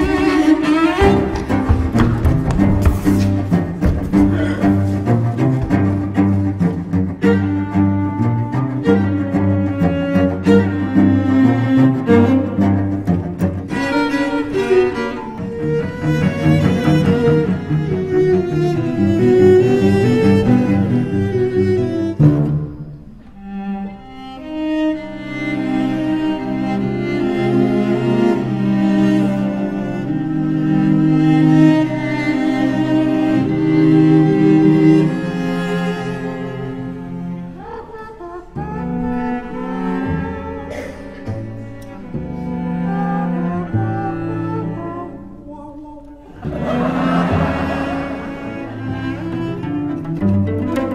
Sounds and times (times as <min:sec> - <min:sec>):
Cello: 0:00.0 - 0:50.9
Classical music: 0:00.0 - 0:50.9
String section: 0:00.0 - 0:50.9.